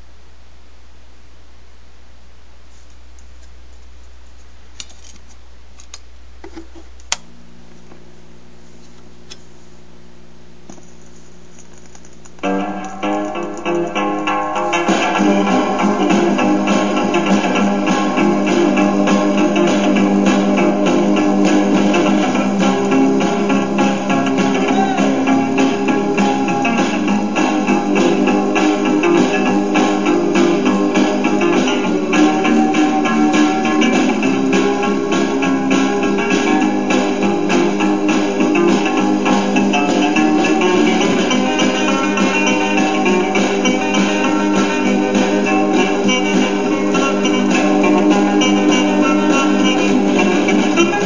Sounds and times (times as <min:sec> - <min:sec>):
Music: 0:12.4 - 0:51.0.